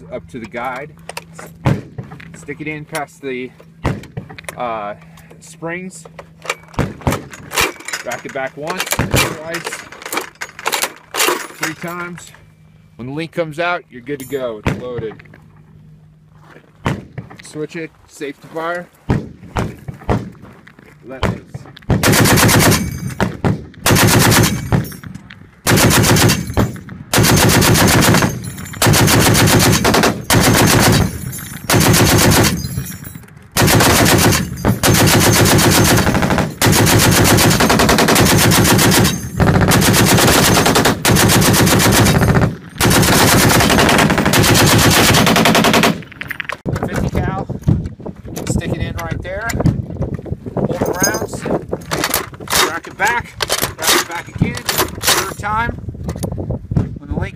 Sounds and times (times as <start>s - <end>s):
Speech: 0.0s - 1.0s, 2.3s - 3.6s, 4.5s - 6.1s, 8.0s - 9.8s, 11.6s - 12.4s, 13.0s - 15.2s, 17.4s - 18.9s, 21.0s - 21.7s, 46.8s - 47.5s, 48.4s - 49.6s, 50.7s - 51.6s, 52.6s - 55.8s, 57.0s - 57.3s.